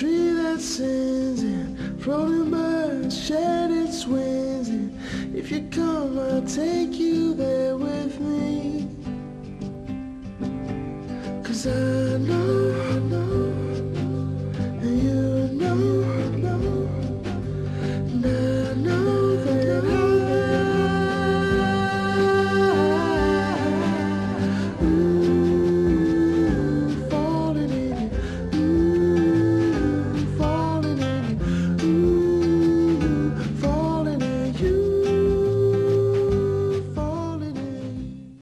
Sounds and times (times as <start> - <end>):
Music: 0.0 - 38.4.